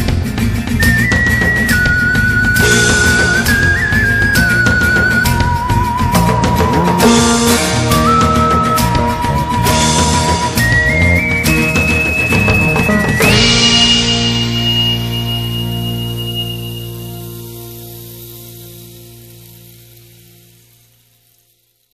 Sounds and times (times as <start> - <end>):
Music: 0.0 - 21.9.